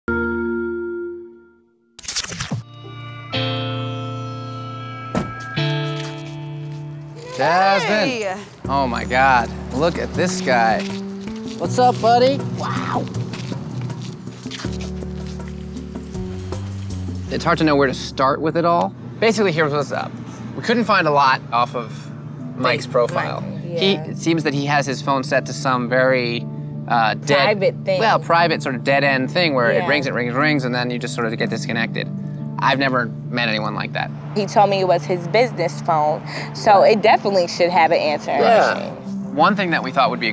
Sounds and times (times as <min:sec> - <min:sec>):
Music: 0:00.1 - 0:19.0, 0:20.6 - 0:40.3
Outside, urban or manmade: 0:00.1 - 0:40.3.